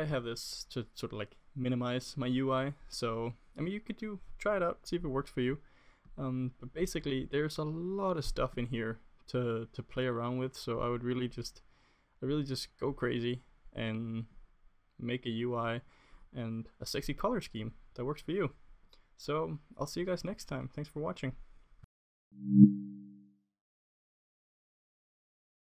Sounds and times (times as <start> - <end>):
Speech: 0.0 - 5.6, 6.2 - 11.6, 12.2 - 14.4, 15.0 - 18.6, 19.2 - 21.4
Silence: 22.4 - 23.2.